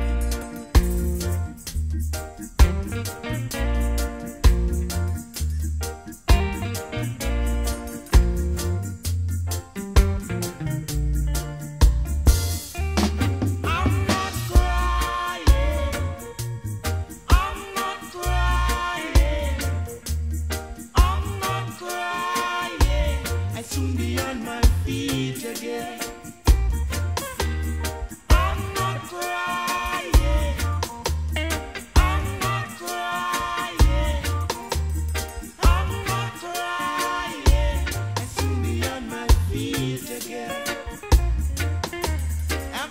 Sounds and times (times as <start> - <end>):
Music: 0.0 - 42.9.